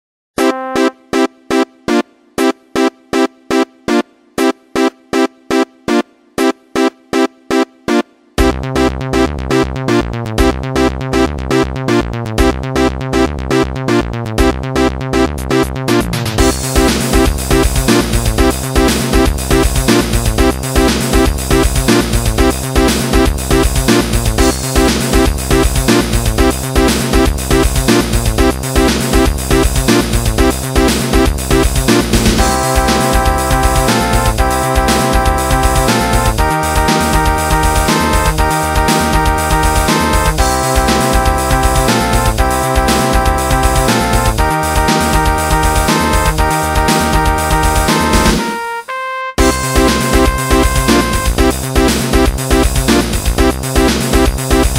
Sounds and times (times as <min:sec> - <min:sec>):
Video game music: 0:00.4 - 0:54.7.